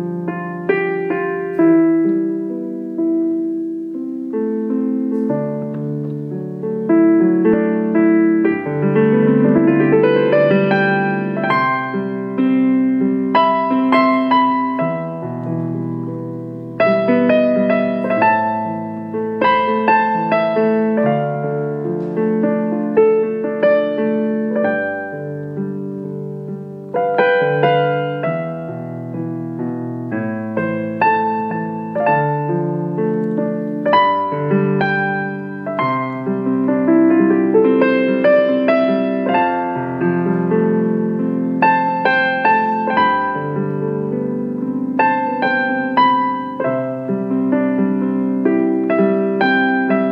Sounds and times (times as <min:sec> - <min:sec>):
Music: 0:00.0 - 0:50.1.